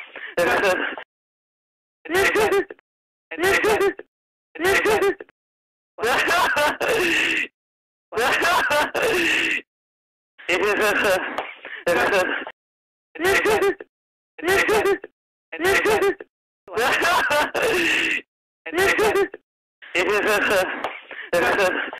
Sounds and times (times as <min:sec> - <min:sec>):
Giggle: 0:00.3 - 0:01.0, 0:02.1 - 0:05.3, 0:10.5 - 0:12.5, 0:13.2 - 0:17.8, 0:18.7 - 0:21.9.